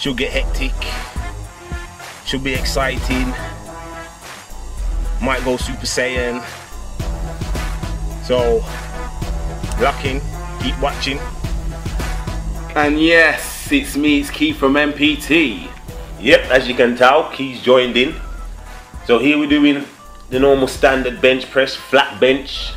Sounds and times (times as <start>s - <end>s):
Speech: 0.0s - 1.1s, 2.2s - 3.5s, 5.2s - 6.6s, 8.3s - 8.7s, 9.8s - 11.3s, 12.8s - 18.2s, 19.0s - 22.7s
Music: 0.0s - 22.7s.